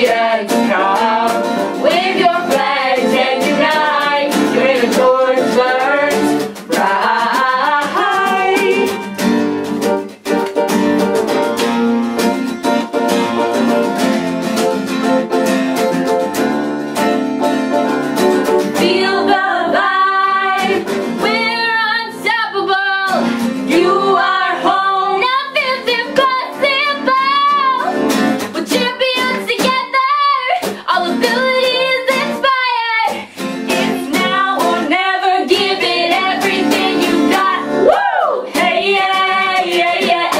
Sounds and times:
Music: 0:00.0 - 0:40.3.

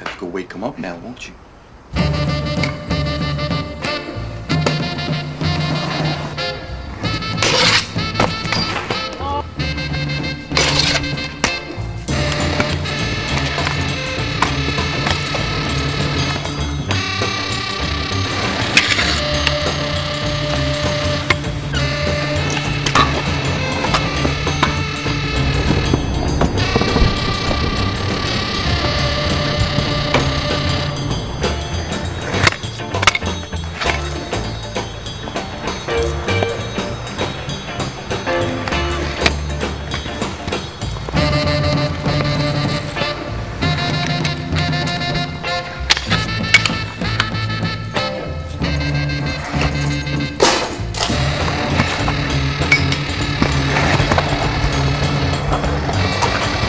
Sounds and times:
Music: 0:01.9 - 0:56.6
Skateboard: 0:03.5 - 0:09.4, 0:10.2 - 0:56.6.

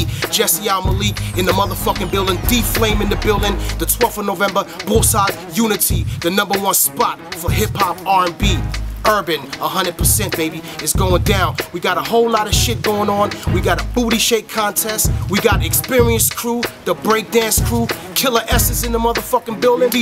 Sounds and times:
Music: 0:00.0 - 0:20.0.

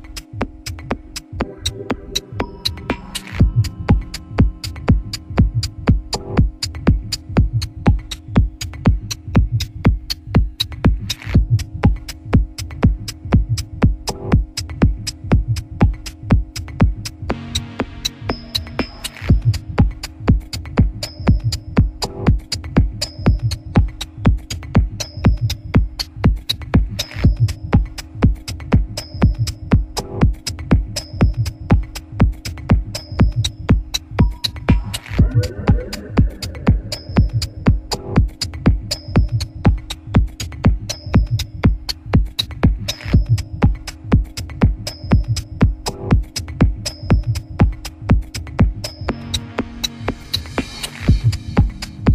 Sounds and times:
Techno: 0:00.0 - 0:52.1.

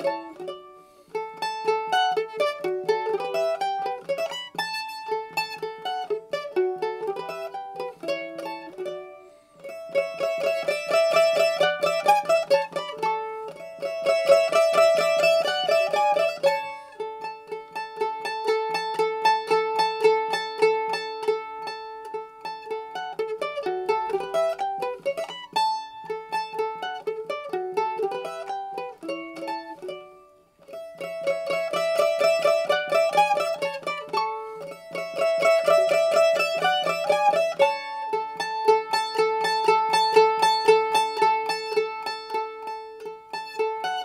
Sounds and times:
Mandolin: 0:00.0 - 0:44.0.

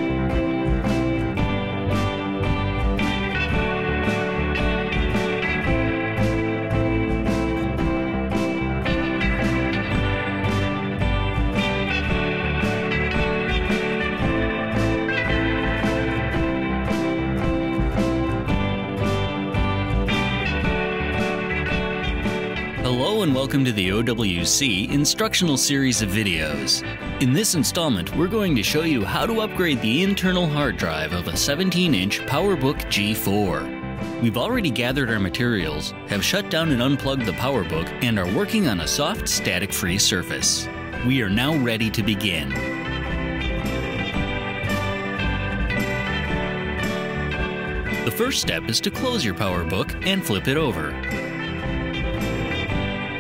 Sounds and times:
Music: 0:00.0 - 0:53.2.

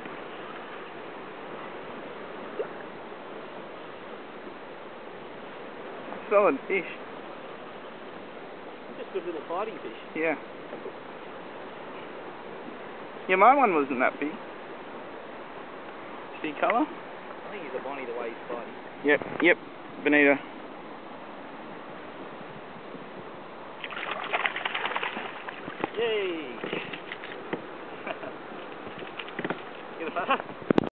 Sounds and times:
Boat, Water vehicle: 0:00.0 - 0:30.9
Speech: 0:09.0 - 0:10.4, 0:16.4 - 0:16.9, 0:17.5 - 0:20.4, 0:26.0 - 0:26.6.

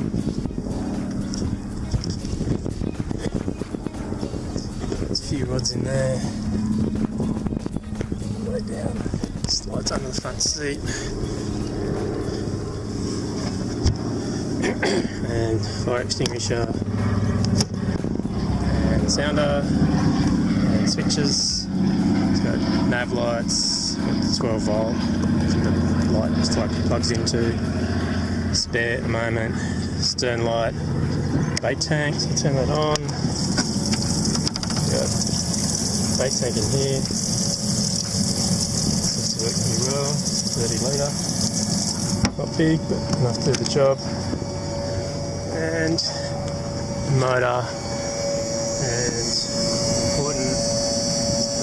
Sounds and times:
Music: 0:00.0 - 0:05.3, 0:06.3 - 0:10.2
Vehicle: 0:00.0 - 0:51.6
Speech: 0:05.1 - 0:06.4, 0:08.4 - 0:11.0, 0:14.8 - 0:16.8, 0:18.9 - 0:19.7, 0:20.9 - 0:21.7, 0:22.4 - 0:25.0, 0:26.1 - 0:27.6, 0:28.5 - 0:30.8, 0:31.6 - 0:33.2, 0:34.8 - 0:35.2, 0:36.2 - 0:37.1, 0:39.2 - 0:41.2, 0:42.3 - 0:44.1, 0:45.5 - 0:46.3, 0:47.1 - 0:47.8, 0:48.8 - 0:50.7.

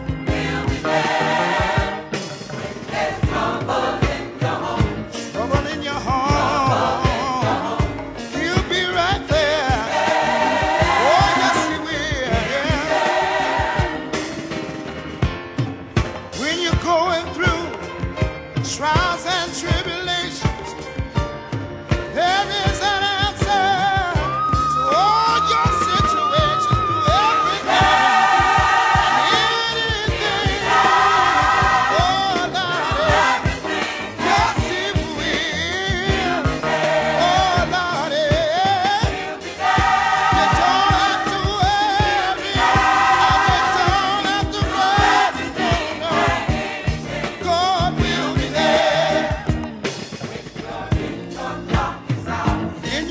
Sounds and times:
Choir: 0:00.0 - 0:14.5, 0:23.5 - 0:53.1.

